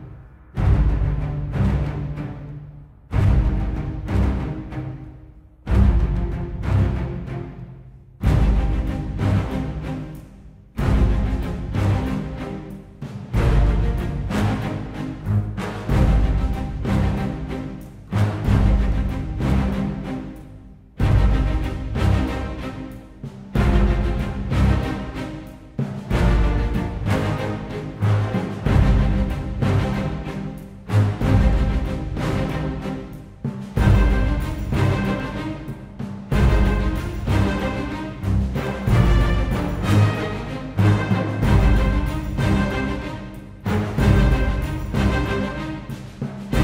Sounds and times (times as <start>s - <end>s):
Music: 0.0s - 46.6s.